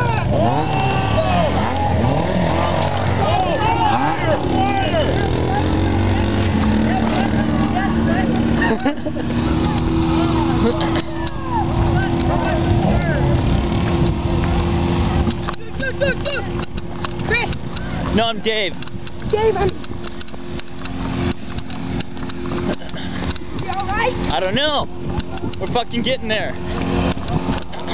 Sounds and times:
Vehicle: 0.0 - 27.9.

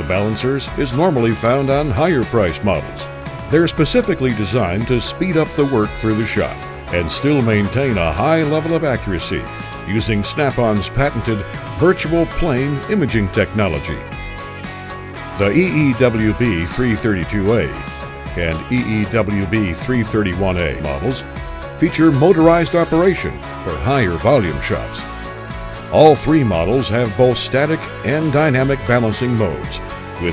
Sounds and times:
Speech: 0.0 - 14.1, 15.4 - 21.2, 21.8 - 25.0, 25.9 - 30.3
Music: 0.0 - 30.3.

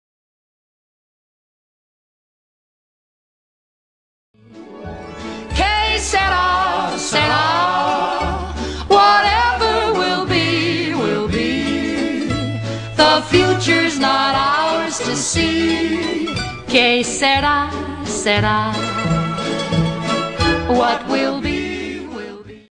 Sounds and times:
Music: 4.4 - 22.7.

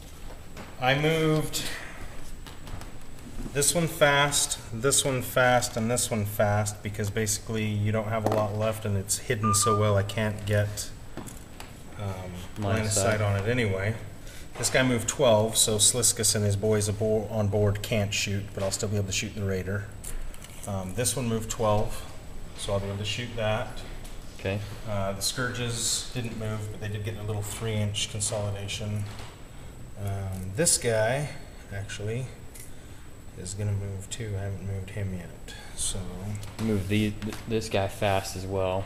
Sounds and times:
Speech: 0.8 - 1.8, 3.5 - 11.0, 12.0 - 19.9, 20.6 - 29.2, 30.0 - 32.4, 33.4 - 38.8.

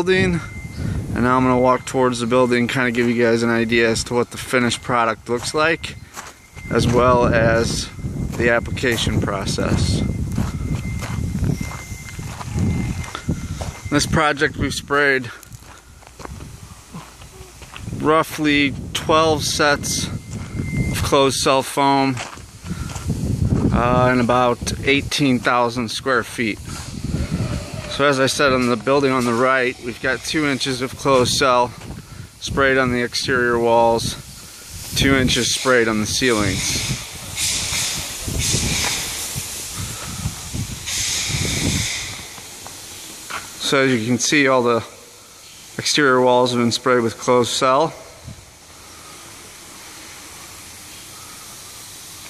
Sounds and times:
Speech: 0.0 - 0.5, 1.2 - 6.0, 6.7 - 10.1, 13.9 - 15.4, 17.4 - 20.2, 21.0 - 22.2, 23.7 - 26.7, 27.9 - 31.8, 32.4 - 34.2, 35.0 - 36.7, 43.6 - 44.9, 45.8 - 48.0.

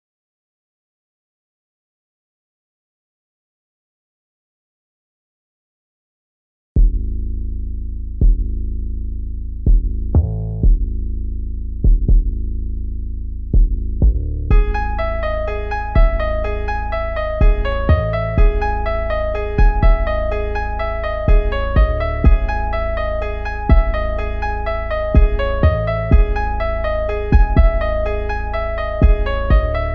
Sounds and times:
Music: 6.8 - 7.0, 8.1 - 8.9, 9.6 - 11.0, 11.8 - 12.8, 13.5 - 29.9.

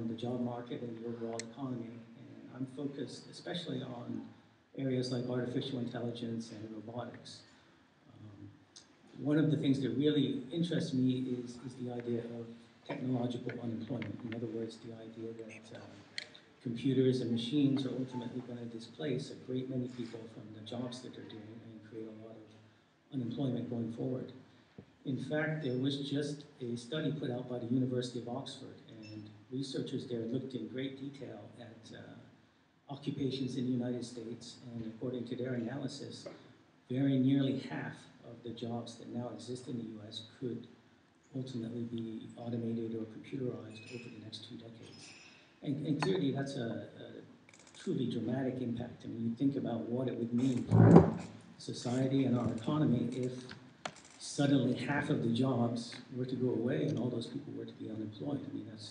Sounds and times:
Speech: 0.0 - 24.4, 25.0 - 53.6, 54.2 - 58.9.

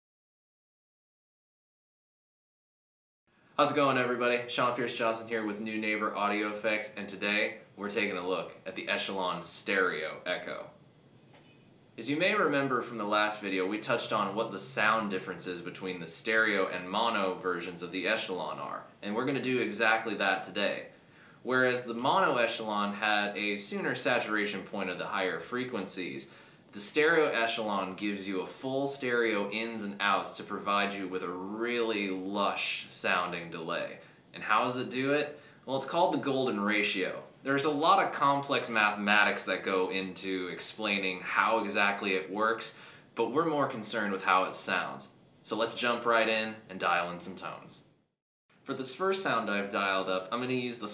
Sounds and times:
Speech: 3.6 - 10.8, 12.0 - 47.9, 48.7 - 50.9.

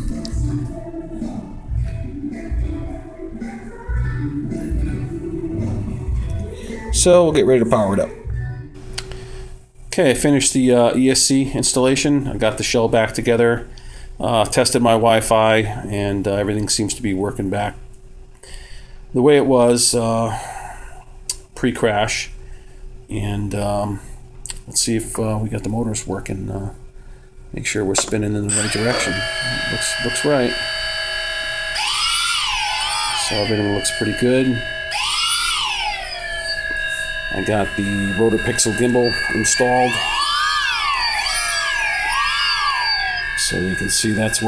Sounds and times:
Speech: 6.9 - 8.3, 9.9 - 17.8, 19.2 - 20.4, 21.6 - 22.4, 23.1 - 26.8, 27.6 - 30.6, 33.2 - 34.6, 37.4 - 40.1, 43.4 - 44.4.

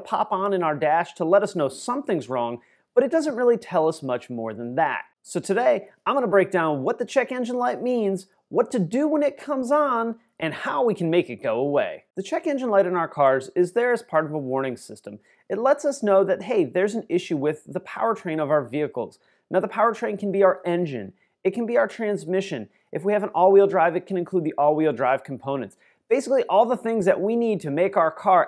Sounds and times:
Speech: 0.0 - 28.4.

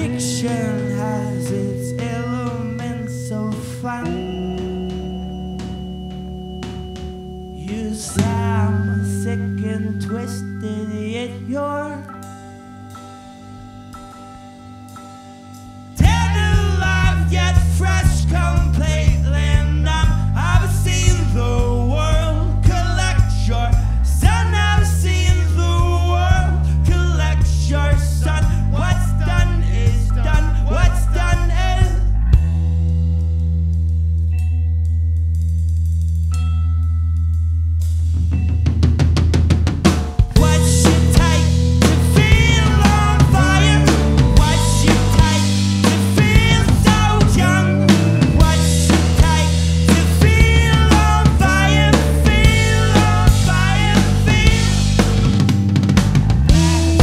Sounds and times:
Music: 0.0 - 57.0.

